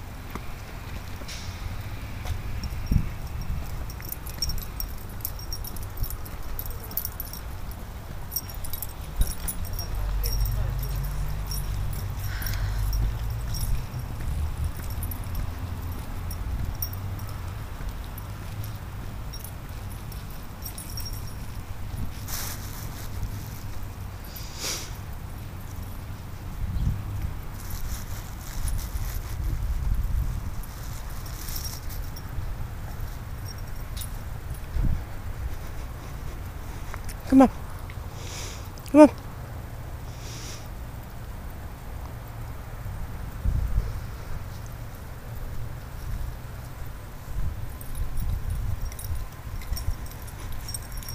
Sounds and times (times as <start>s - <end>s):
Outside, urban or manmade: 0.0s - 51.1s
Speech: 9.8s - 11.0s, 37.3s - 37.5s, 38.9s - 39.2s.